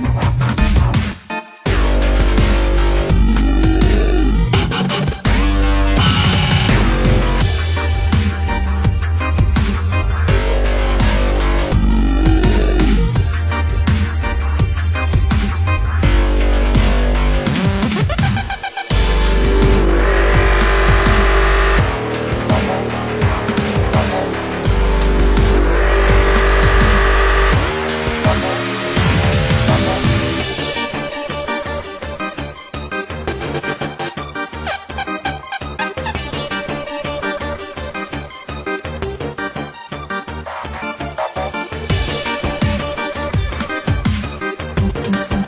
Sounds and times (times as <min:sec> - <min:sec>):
Dubstep: 0:00.0 - 0:38.1.